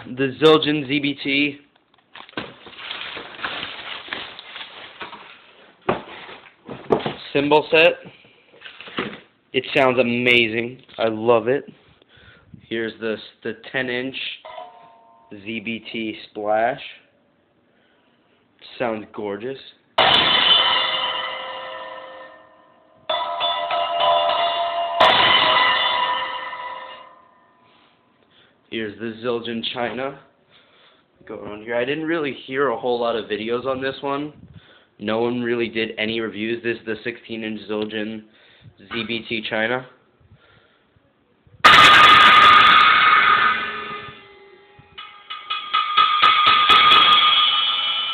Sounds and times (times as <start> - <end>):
Speech: 0.0 - 1.7, 7.2 - 8.1, 9.6 - 11.8, 12.6 - 14.5, 15.3 - 17.1, 18.6 - 19.8, 28.7 - 30.3, 31.2 - 34.4, 35.0 - 40.0.